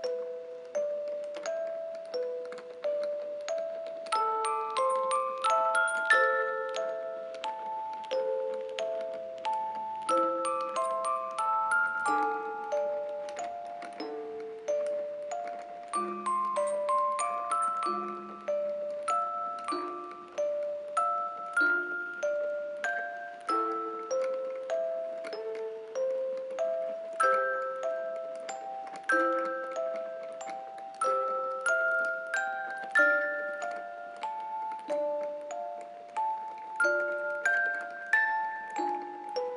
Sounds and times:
Glockenspiel: 0:00.0 - 0:39.5
Marimba, xylophone: 0:00.0 - 0:39.5.

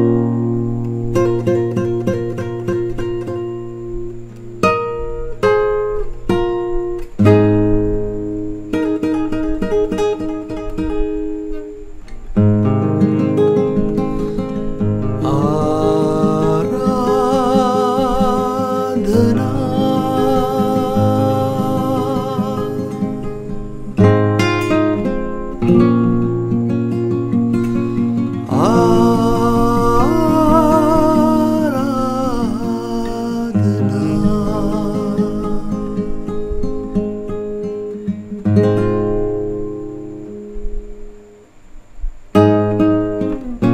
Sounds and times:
Strum: 0:00.0 - 0:41.2
Acoustic guitar: 0:00.0 - 0:43.7.

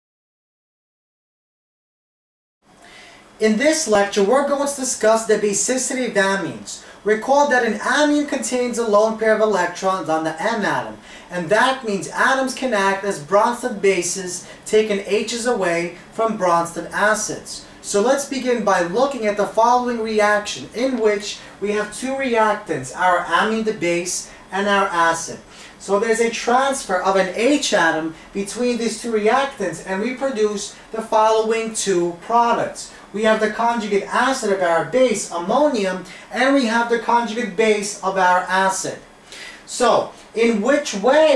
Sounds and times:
Speech: 0:03.4 - 0:39.1, 0:39.7 - 0:41.3.

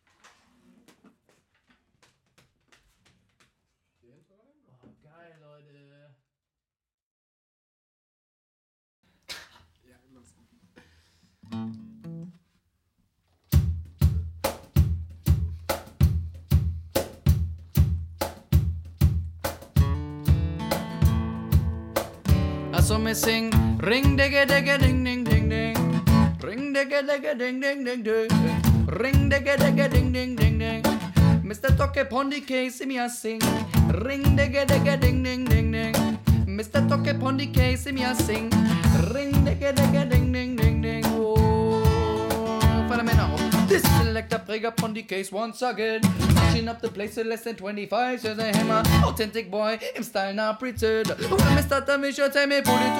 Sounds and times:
Speech: 0:04.0 - 0:06.3, 0:09.8 - 0:10.4
Music: 0:11.5 - 0:12.4, 0:13.5 - 0:26.6, 0:28.3 - 0:32.0, 0:33.4 - 0:44.4, 0:46.0 - 0:46.9, 0:48.4 - 0:49.3, 0:51.0 - 0:51.9, 0:52.6 - 0:52.9.

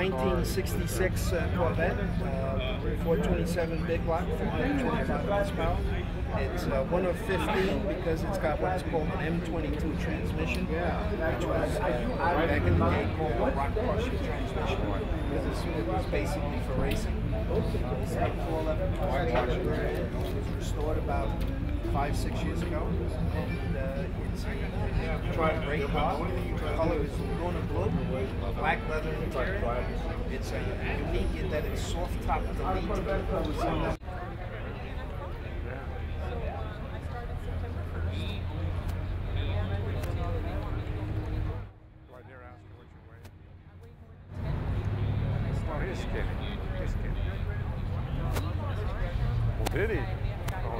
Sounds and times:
Speech: 0:00.0 - 0:50.7.

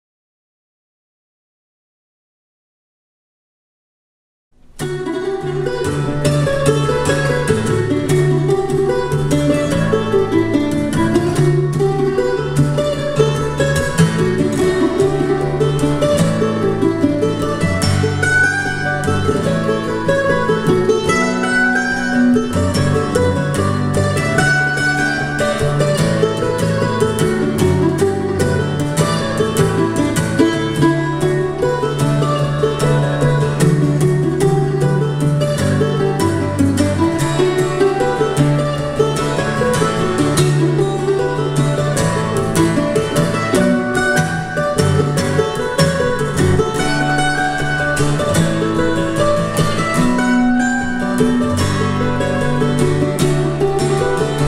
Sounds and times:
Guitar: 0:04.6 - 0:54.4
Mandolin: 0:04.6 - 0:54.4.

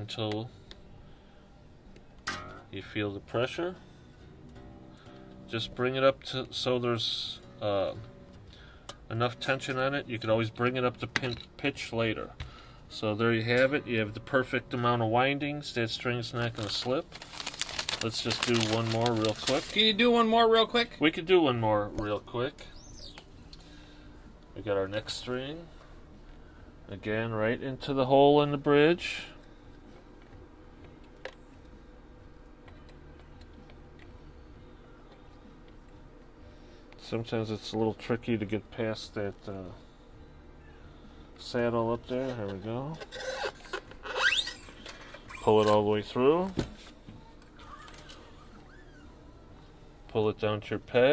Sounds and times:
Inside, small room: 0:00.0 - 0:51.1
Speech: 0:02.7 - 0:03.8, 0:18.0 - 0:22.7, 0:24.6 - 0:25.7, 0:26.9 - 0:29.4, 0:37.0 - 0:39.8, 0:41.4 - 0:43.0, 0:45.4 - 0:46.6, 0:50.1 - 0:51.1.

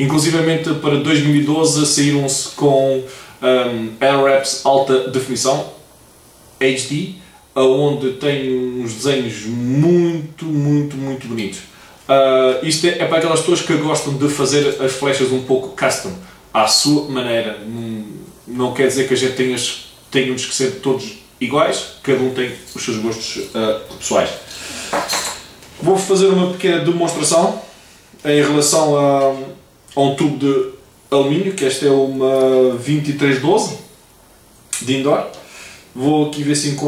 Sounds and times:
Speech: 0:00.0 - 0:05.8, 0:06.6 - 0:24.5, 0:25.8 - 0:33.9, 0:34.8 - 0:35.4, 0:36.0 - 0:36.8.

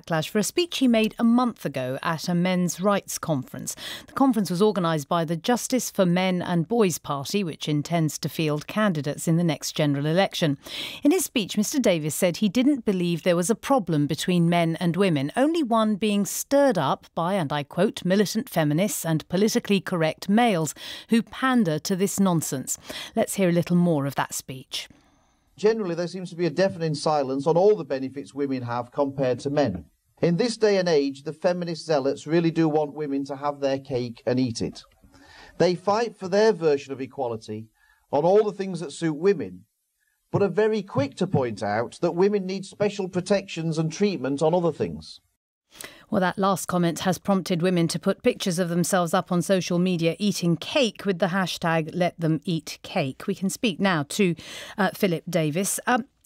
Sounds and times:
Speech: 0:00.0 - 0:24.9, 0:25.6 - 0:34.8, 0:35.6 - 0:39.6, 0:40.4 - 0:45.2, 0:46.1 - 0:56.1.

